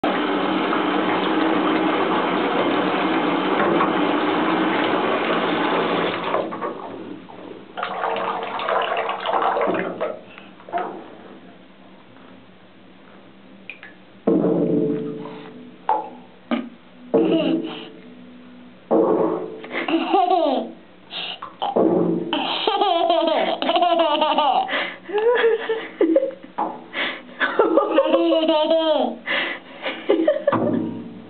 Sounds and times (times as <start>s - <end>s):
Bathtub (filling or washing): 0.0s - 10.6s, 19.7s - 25.8s.